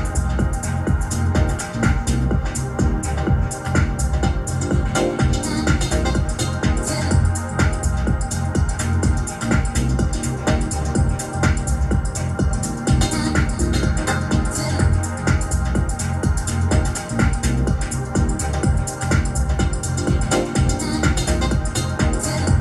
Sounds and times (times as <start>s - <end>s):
Dance music: 0.0s - 22.6s
House music: 0.0s - 22.6s
Pop music: 0.0s - 22.6s.